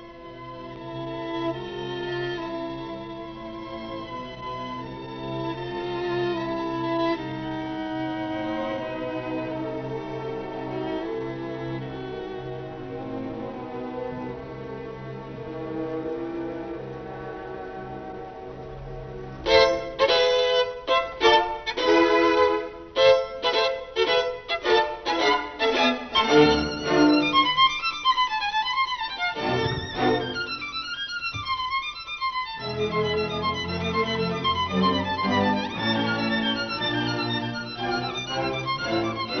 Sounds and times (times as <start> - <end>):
Violin, fiddle: 0.0 - 39.4.